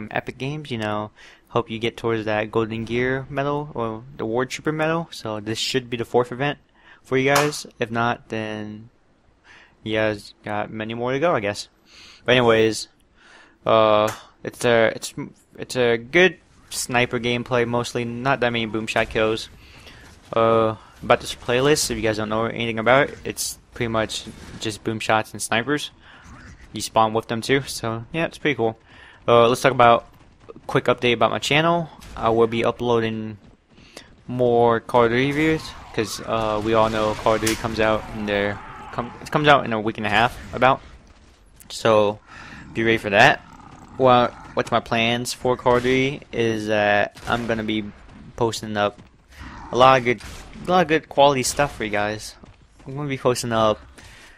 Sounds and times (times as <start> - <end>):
Speech: 0.0 - 8.9, 9.9 - 11.7, 12.3 - 12.9, 13.7 - 19.5, 20.3 - 26.0, 26.7 - 33.4, 34.3 - 40.8, 41.7 - 43.4, 44.0 - 49.0, 49.7 - 53.8.